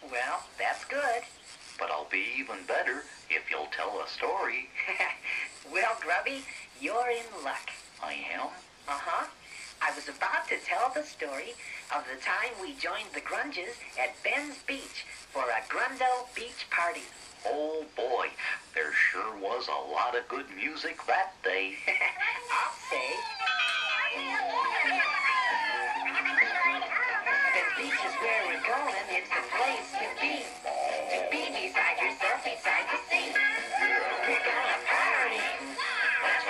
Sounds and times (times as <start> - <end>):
Speech: 5.7 - 23.3.